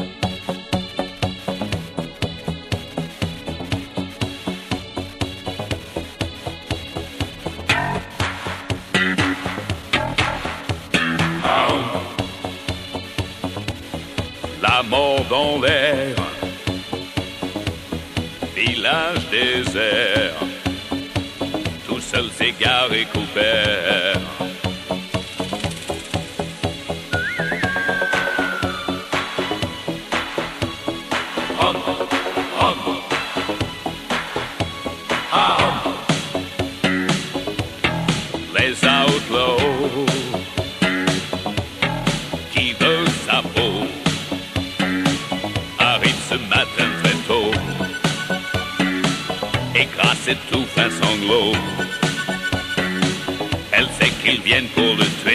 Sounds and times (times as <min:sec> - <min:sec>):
Music: 0:00.0 - 0:55.3.